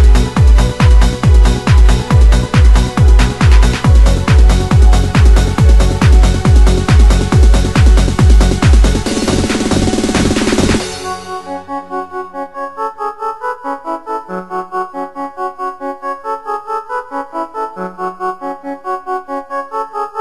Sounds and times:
Techno: 0.0s - 20.2s.

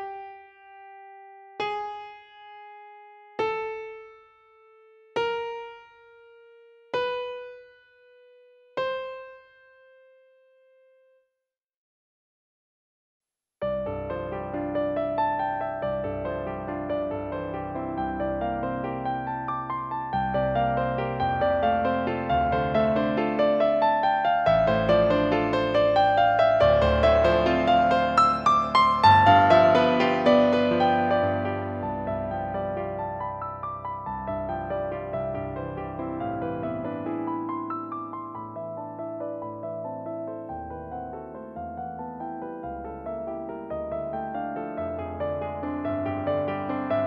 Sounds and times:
Music: 0.0s - 11.4s, 13.6s - 47.0s.

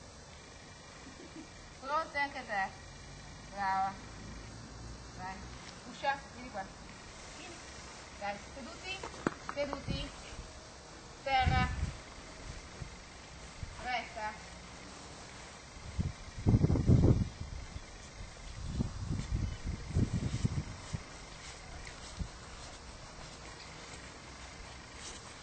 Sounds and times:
Speech: 13.8s - 14.4s.

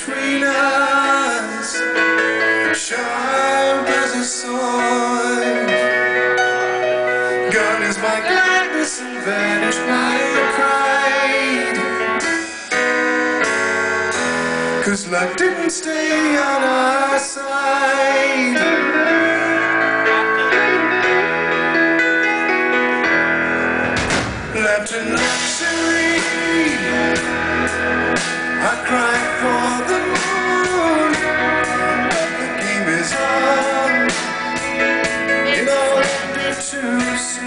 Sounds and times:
Music: 0.0s - 37.4s.

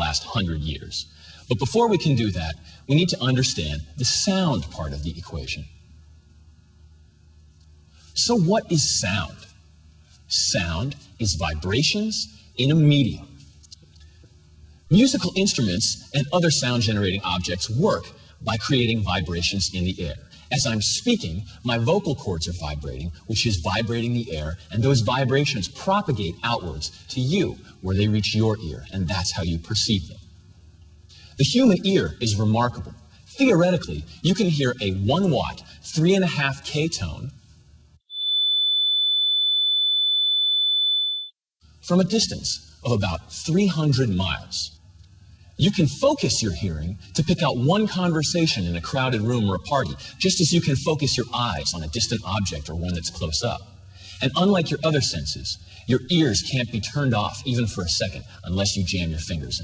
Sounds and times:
Speech: 0.0s - 5.8s, 8.2s - 9.6s, 10.3s - 13.4s, 14.9s - 30.2s, 31.3s - 37.4s, 41.8s - 44.8s, 45.6s - 59.6s.

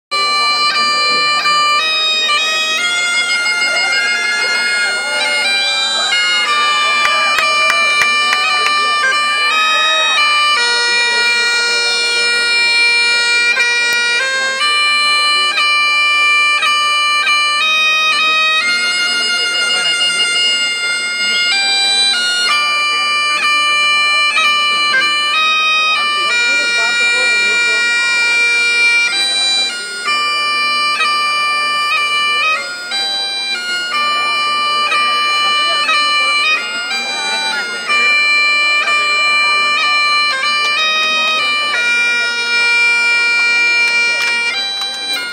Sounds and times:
Bagpipes: 0.1s - 45.3s
Wind instrument, woodwind instrument: 0.1s - 45.3s.

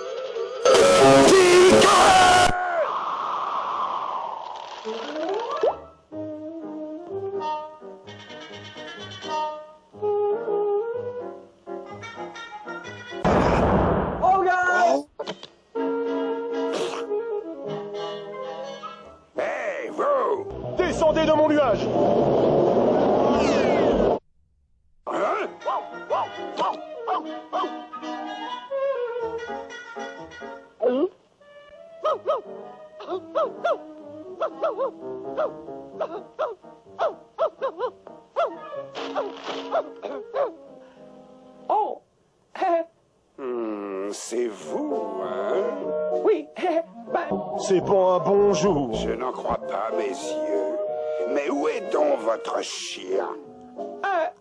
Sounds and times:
Music: 0.0s - 2.5s, 4.9s - 13.3s, 15.2s - 24.2s, 25.1s - 41.8s, 44.0s - 54.4s
Burst, pop: 13.2s - 14.3s
Speech: 19.4s - 21.8s, 43.9s - 50.4s, 51.3s - 53.4s.

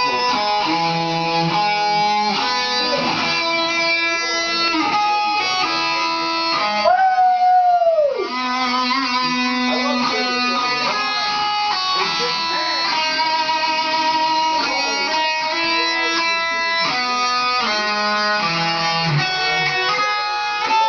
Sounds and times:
Speech: 0.0s - 0.8s, 2.0s - 3.4s, 4.0s - 6.2s, 9.2s - 17.8s, 19.1s - 20.8s
Electric guitar: 0.0s - 20.8s
Strum: 8.0s - 20.8s.

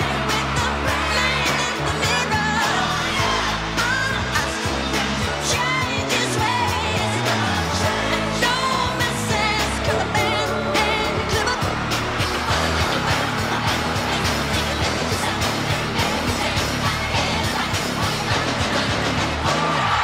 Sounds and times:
Singing: 0.0s - 20.0s.

